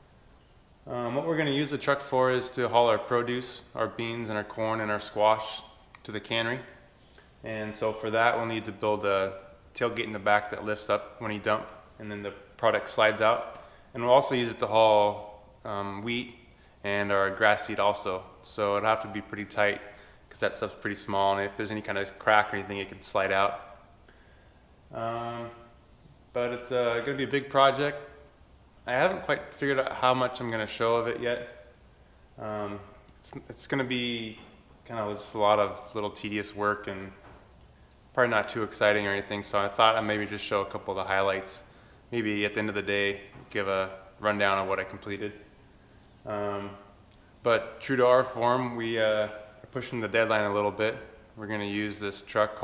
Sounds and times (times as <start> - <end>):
Speech: 0.8 - 6.8, 7.4 - 23.7, 24.9 - 25.7, 26.3 - 28.2, 28.8 - 31.7, 32.4 - 37.2, 38.2 - 45.5, 46.2 - 52.6.